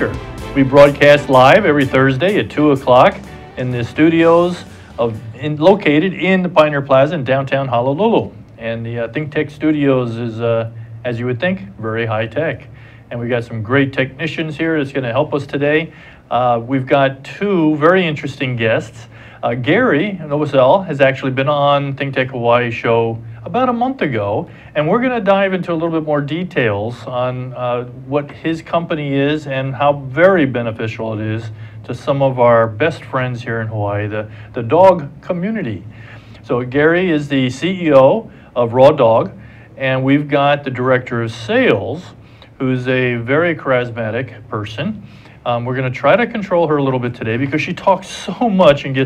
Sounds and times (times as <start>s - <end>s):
Speech: 0.0s - 49.0s.